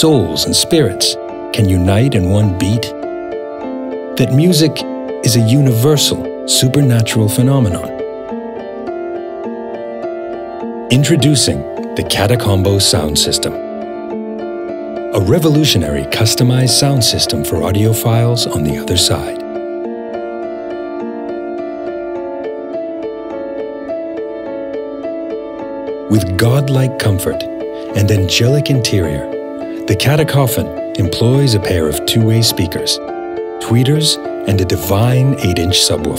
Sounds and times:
Speech: 0.0s - 3.0s, 4.2s - 8.0s, 10.9s - 13.6s, 15.2s - 19.4s, 26.1s - 33.0s, 33.6s - 36.1s
Music: 0.0s - 36.1s.

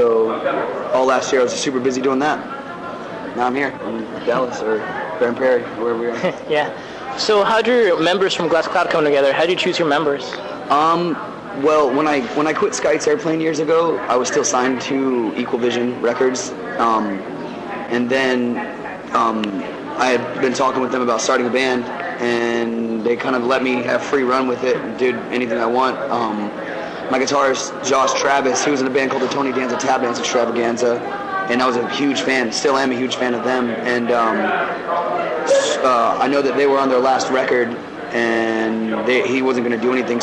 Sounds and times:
Speech: 0.0s - 40.2s.

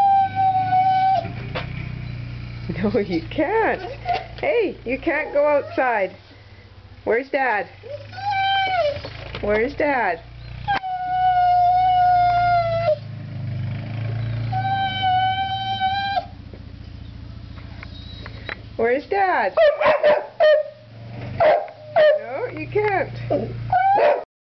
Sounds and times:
Speech: 2.7s - 6.2s, 7.0s - 7.8s, 9.4s - 10.2s, 18.8s - 19.6s, 22.2s - 23.6s
Domestic animals, pets: 5.1s - 5.9s, 14.2s - 16.3s, 17.8s - 18.6s, 23.3s - 24.2s.

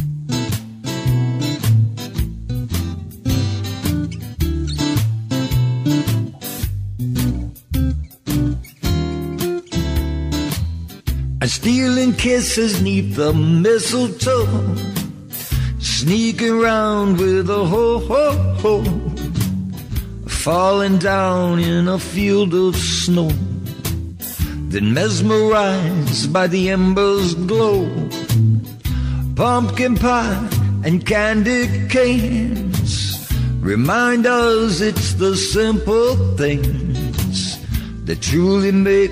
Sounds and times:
Christmas music: 0.4s - 13.3s
Christian music: 11.4s - 39.1s.

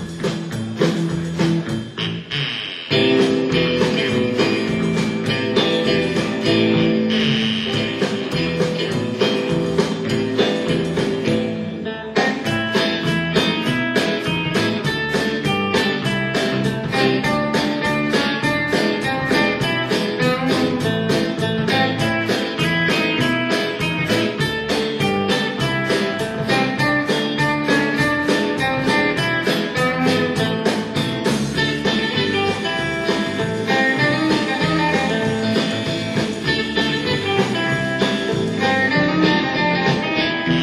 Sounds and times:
Music: 0.0s - 40.6s.

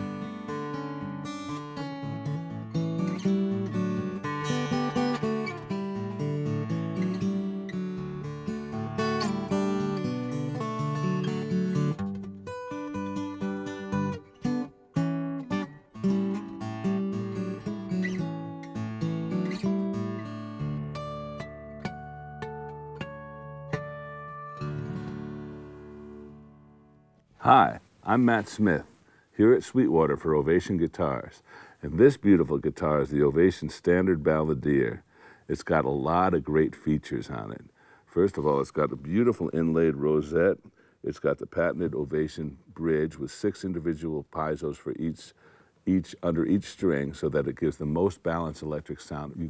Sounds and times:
Music: 0.0s - 27.4s.

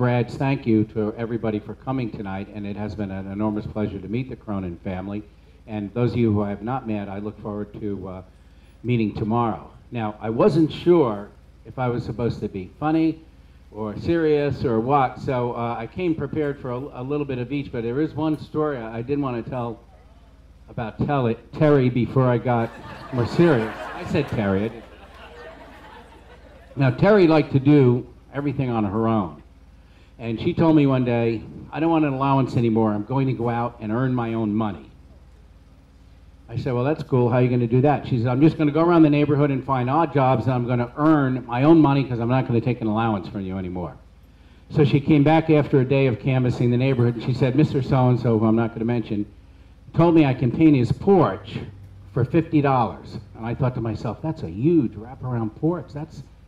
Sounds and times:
Male speech, man speaking: 0.0s - 8.3s, 8.9s - 13.2s, 13.8s - 20.0s, 20.7s - 24.9s, 26.8s - 29.4s, 30.2s - 34.9s, 36.5s - 44.0s, 44.7s - 49.3s, 50.0s - 56.3s
Narration, monologue: 0.0s - 56.4s.

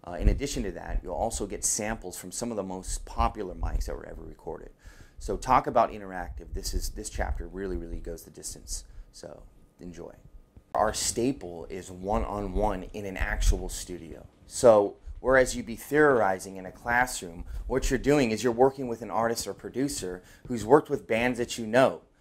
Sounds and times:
Speech: 0.0s - 22.1s.

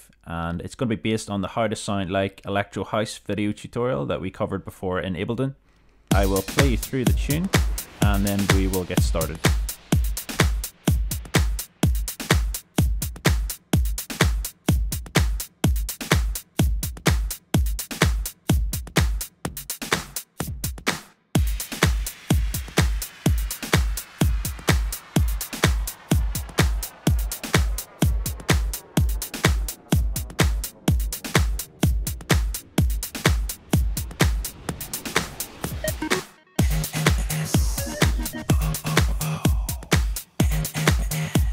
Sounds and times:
Exciting music: 6.1s - 41.5s.

